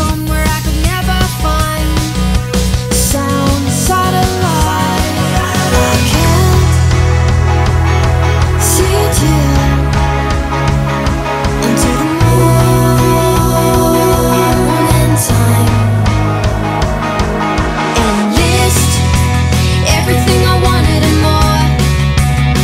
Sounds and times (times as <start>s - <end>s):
Music: 0.0s - 22.6s.